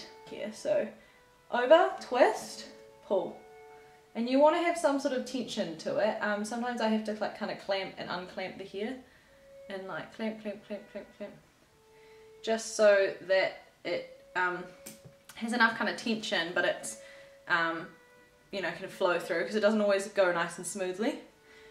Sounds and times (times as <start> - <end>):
Speech: 0.0 - 0.9, 1.5 - 3.4, 4.2 - 9.0, 9.7 - 11.4, 12.4 - 14.7, 15.4 - 17.9, 18.6 - 21.3
Music: 0.0 - 21.7.